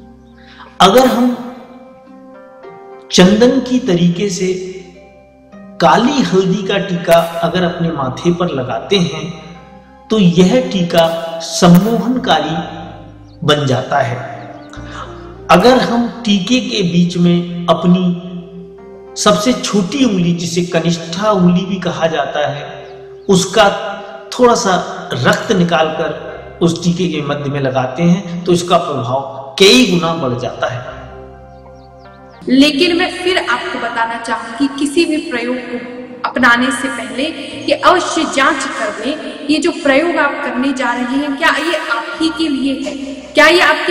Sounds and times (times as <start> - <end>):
Music: 0.0 - 43.9
Speech: 0.8 - 1.4, 5.8 - 9.4, 10.1 - 12.8, 13.4 - 18.2, 19.2 - 31.0, 32.4 - 43.9.